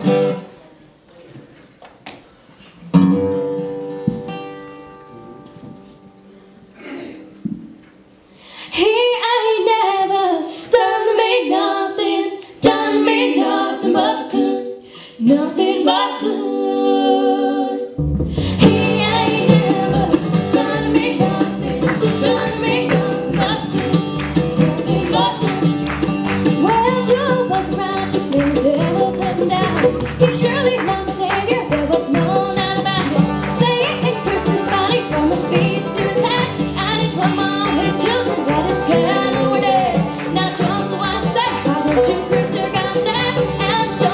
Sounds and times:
Female singing: 8.8 - 17.9, 18.6 - 24.0, 24.6 - 25.6, 26.6 - 44.1.

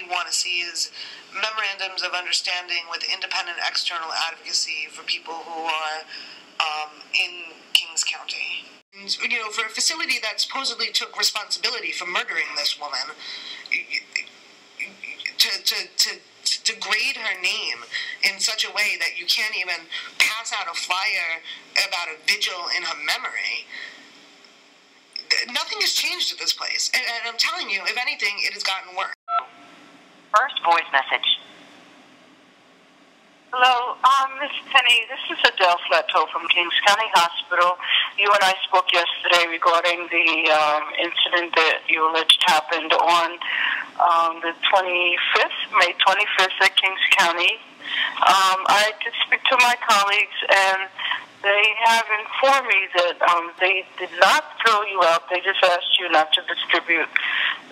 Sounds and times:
Speech: 0.0 - 14.2, 14.8 - 23.8, 25.2 - 29.2, 30.4 - 31.4, 33.6 - 57.6.

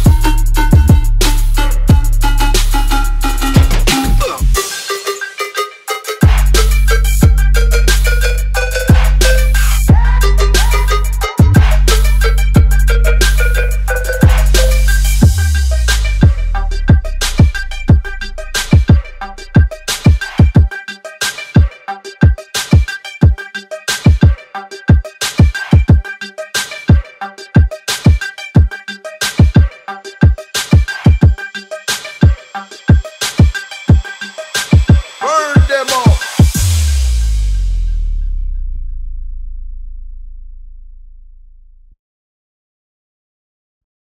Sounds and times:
Music: 0.0 - 42.0.

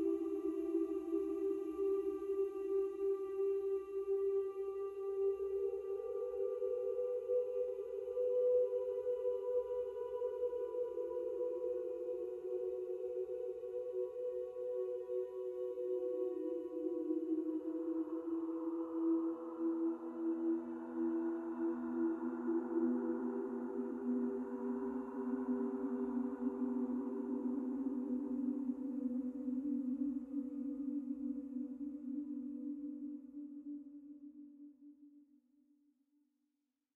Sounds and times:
Music: 0.0 - 36.3.

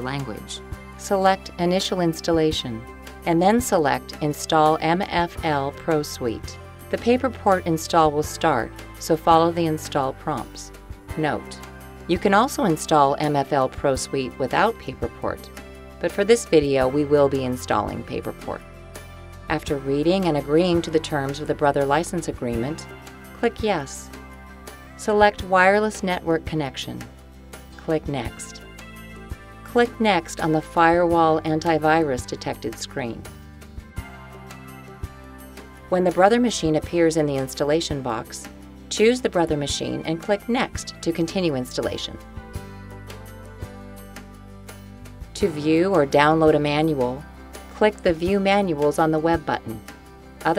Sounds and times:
Speech: 0.0 - 18.6, 19.5 - 22.8, 23.4 - 24.1, 25.0 - 27.0, 27.8 - 28.6, 29.7 - 33.2, 35.9 - 42.2, 45.4 - 47.2, 47.8 - 49.8
Music: 0.0 - 50.5.

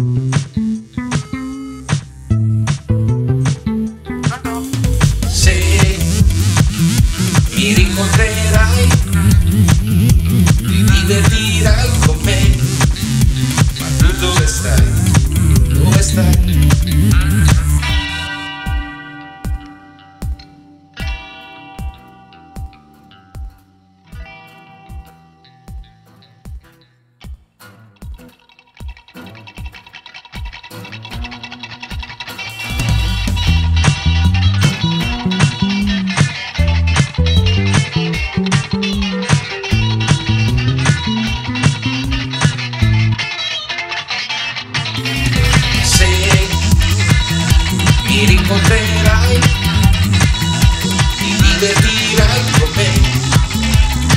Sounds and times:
Electronic dance music: 0.0 - 20.4, 31.9 - 43.2, 44.7 - 54.1.

